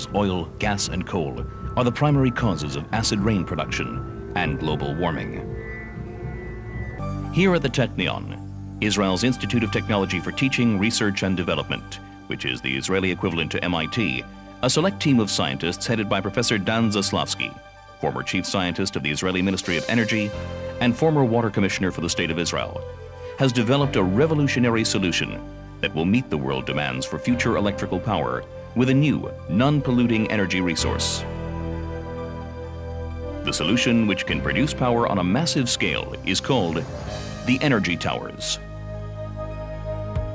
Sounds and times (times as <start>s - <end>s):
Speech: 0.0s - 5.5s, 7.4s - 31.3s, 33.5s - 38.6s
Music: 0.0s - 40.3s.